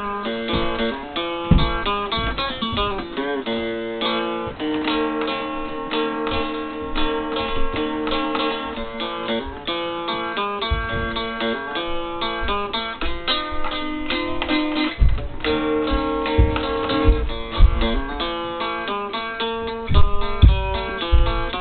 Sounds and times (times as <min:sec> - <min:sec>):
Strum: 0:00.0 - 0:21.6.